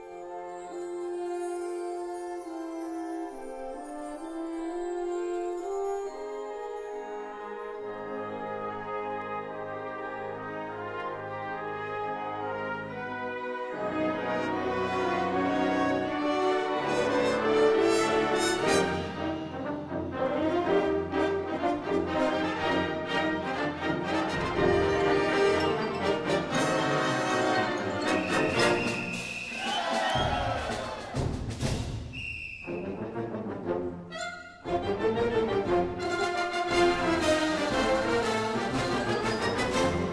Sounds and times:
Music: 0.0s - 40.1s.

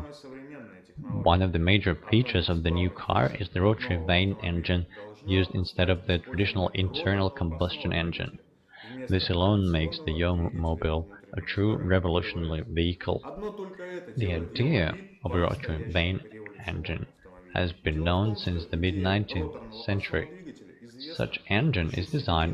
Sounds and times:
Speech: 0.0s - 22.5s.

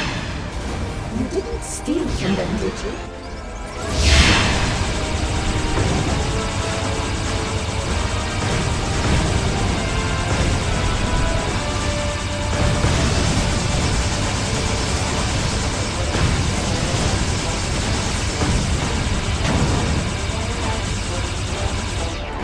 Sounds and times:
Music: 0.0s - 22.4s.

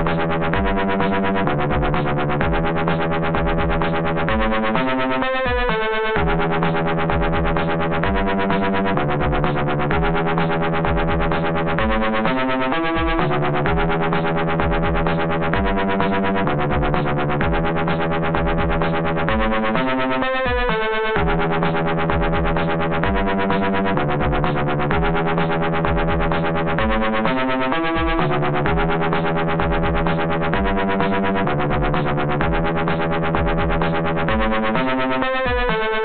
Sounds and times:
Music: 0.0s - 36.0s.

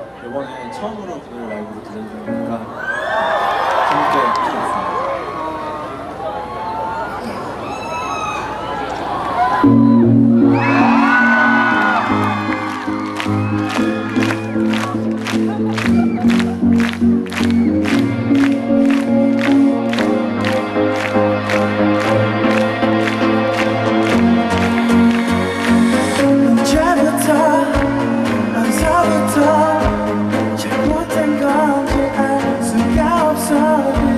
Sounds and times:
Music: 2.3s - 2.8s, 9.6s - 34.1s.

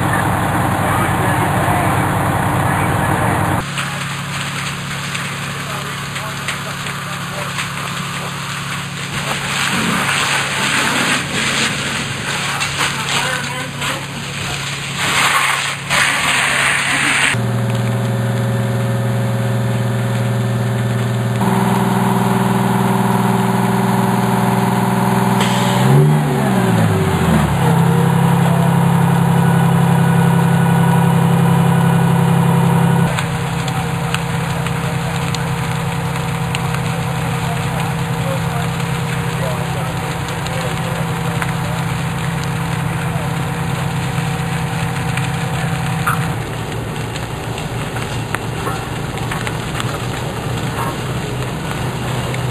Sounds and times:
Speech: 0.0s - 4.2s, 5.4s - 7.7s, 12.4s - 14.8s, 27.6s - 29.9s, 33.6s - 35.8s, 36.8s - 43.6s
Crackle: 0.0s - 52.5s.

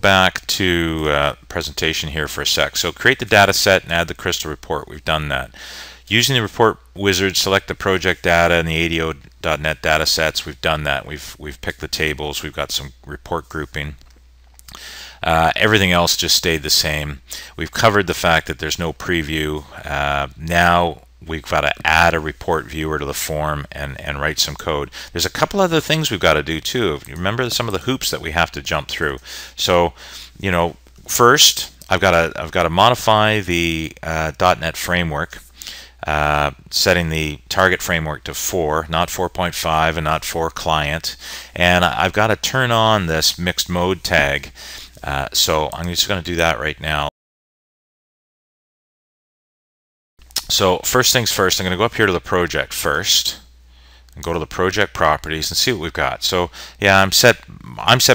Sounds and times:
Speech: 0.0s - 14.0s, 15.2s - 47.1s, 50.4s - 53.5s, 54.2s - 58.1s.

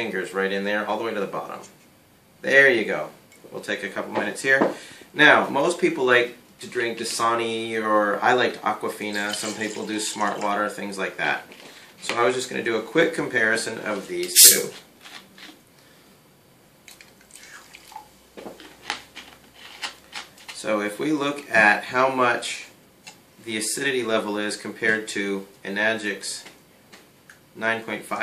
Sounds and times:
Water: 16.9s - 18.1s.

